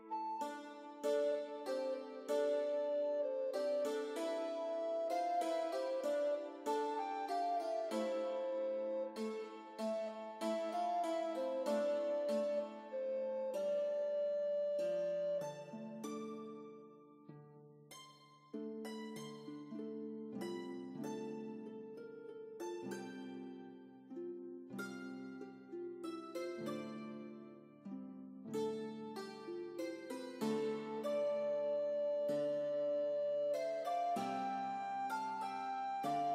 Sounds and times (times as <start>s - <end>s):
Soul music: 0.0s - 16.4s, 28.7s - 36.3s.